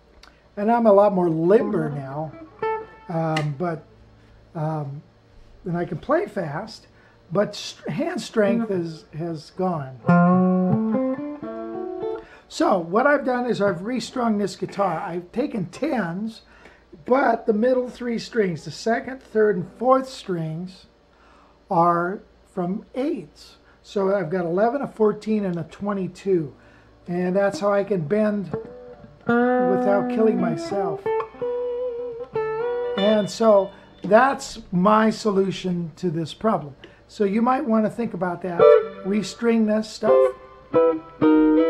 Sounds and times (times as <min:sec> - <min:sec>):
Speech: 0:00.6 - 0:02.4, 0:03.1 - 0:03.9, 0:04.6 - 0:10.1, 0:12.5 - 0:20.9, 0:21.7 - 0:28.6, 0:29.6 - 0:31.1, 0:33.0 - 0:40.4
Tapping (guitar technique): 0:01.4 - 0:03.6, 0:10.0 - 0:12.3, 0:27.4 - 0:34.7, 0:38.6 - 0:41.6.